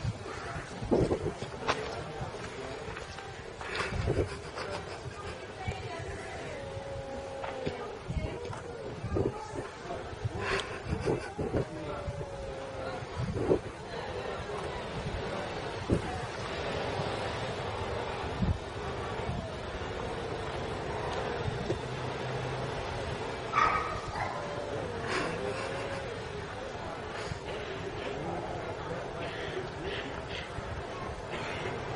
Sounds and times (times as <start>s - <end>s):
Speech: 0.2s - 18.2s.